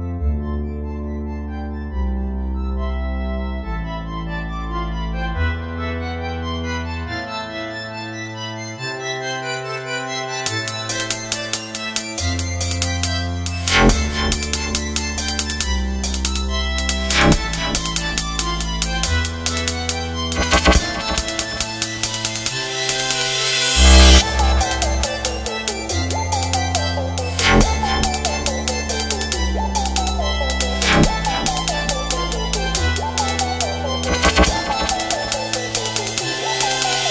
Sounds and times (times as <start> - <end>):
Dubstep: 10.3 - 37.1.